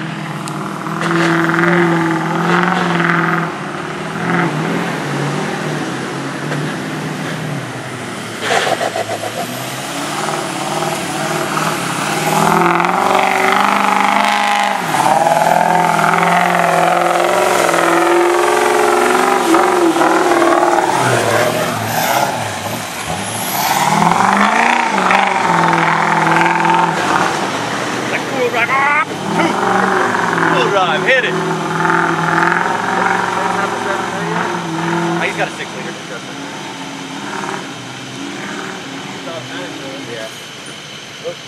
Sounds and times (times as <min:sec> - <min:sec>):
Race car, auto racing: 0:00.0 - 0:41.4
Truck: 0:00.0 - 0:41.4
Speech: 0:30.5 - 0:31.4, 0:32.9 - 0:34.5, 0:35.2 - 0:36.4.